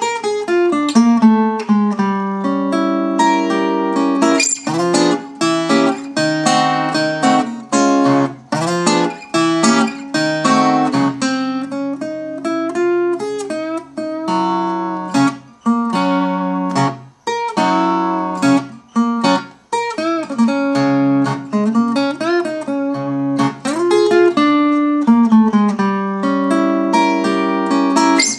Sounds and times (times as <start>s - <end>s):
Acoustic guitar: 0.0s - 28.3s
Blues: 0.0s - 28.3s
Strum: 3.3s - 11.1s, 27.0s - 28.3s.